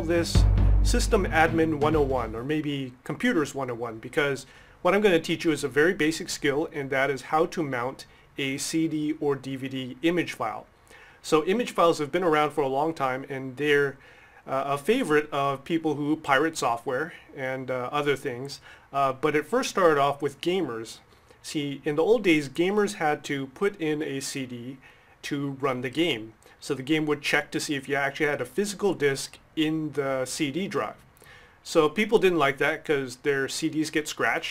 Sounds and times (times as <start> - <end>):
Speech: 0.0 - 31.0, 31.6 - 34.5.